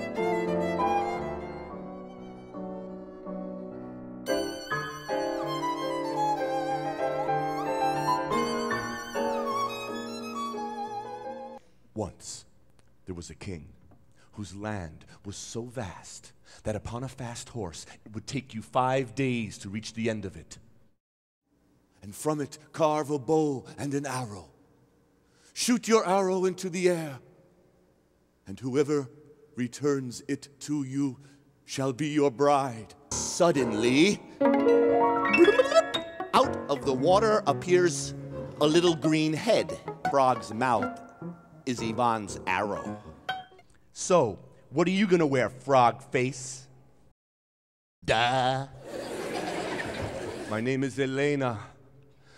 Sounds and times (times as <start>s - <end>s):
Speech: 12.0s - 13.8s, 14.4s - 20.6s, 22.0s - 24.5s, 25.6s - 27.2s, 28.5s - 34.2s, 36.4s - 40.9s, 41.7s - 43.0s, 44.0s - 46.7s, 48.0s - 48.8s, 50.5s - 51.8s.